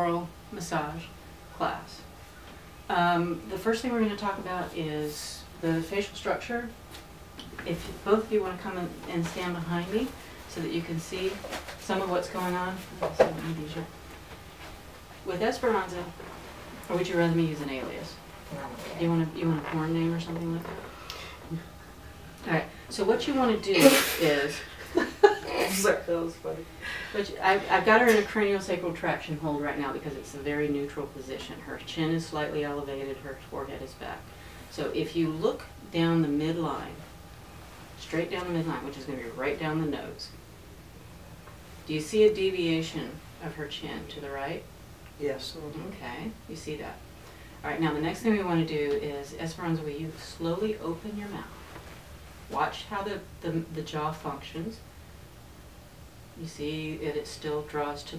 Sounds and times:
Speech: 0:00.0 - 0:02.1, 0:02.9 - 0:06.8, 0:07.6 - 0:14.0, 0:15.2 - 0:16.2, 0:16.8 - 0:20.8, 0:22.4 - 0:37.1, 0:38.0 - 0:40.4, 0:41.8 - 0:47.0, 0:47.6 - 0:51.6, 0:52.5 - 0:54.8, 0:56.4 - 0:58.1.

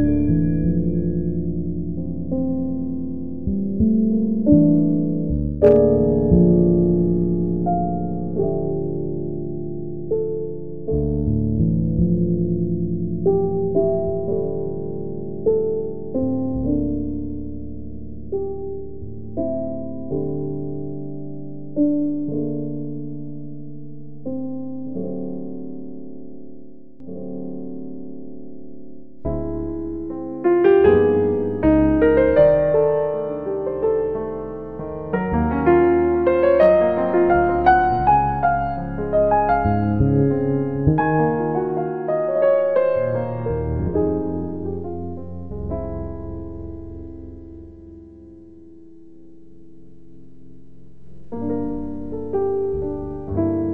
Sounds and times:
Music: 0:00.0 - 0:53.7.

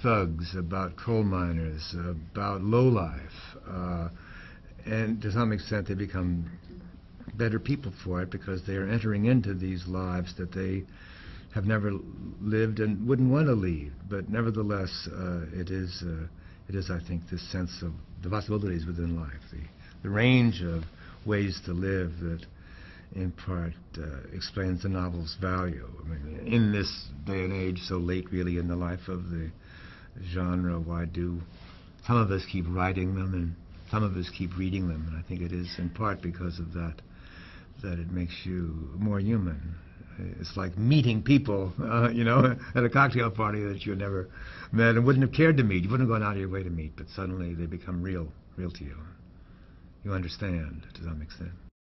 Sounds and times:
Speech: 0:00.0 - 0:04.2, 0:04.8 - 0:10.9, 0:11.5 - 0:22.5, 0:23.1 - 0:29.6, 0:30.2 - 0:37.0, 0:37.8 - 0:49.2, 0:50.0 - 0:51.7.

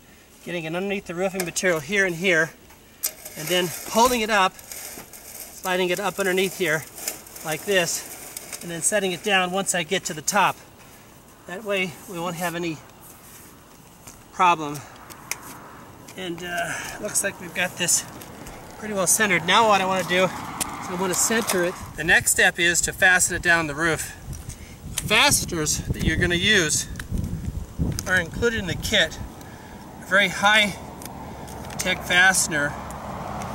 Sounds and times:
Speech: 0:00.4 - 0:02.6, 0:03.4 - 0:04.6, 0:05.6 - 0:10.6, 0:11.5 - 0:12.8, 0:14.4 - 0:14.9, 0:16.2 - 0:18.1, 0:18.8 - 0:20.3, 0:20.9 - 0:24.2, 0:25.0 - 0:26.9, 0:28.0 - 0:29.2, 0:30.1 - 0:30.8, 0:31.8 - 0:32.8.

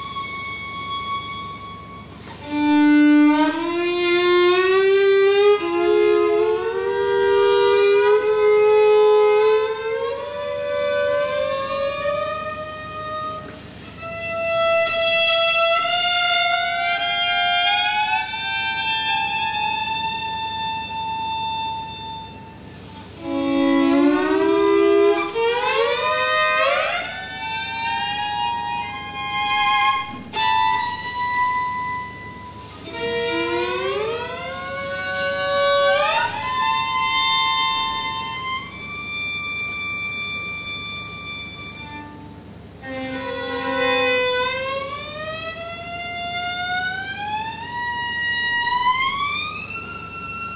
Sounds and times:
Violin, fiddle: 0:00.0 - 0:50.5.

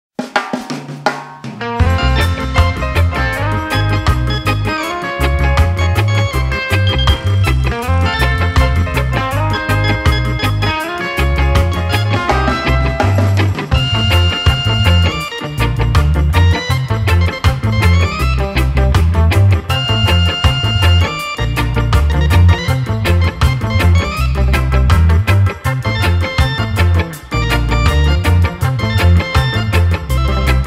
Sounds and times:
Drum roll: 0:00.2 - 0:04.7, 0:05.3 - 0:30.6.

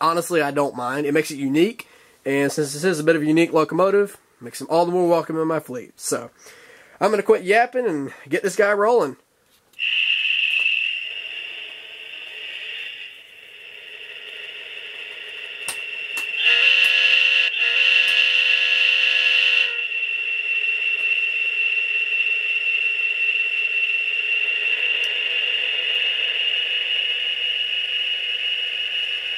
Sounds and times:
Speech: 0:00.0 - 0:06.4, 0:07.0 - 0:09.2
Train: 0:09.8 - 0:18.3.

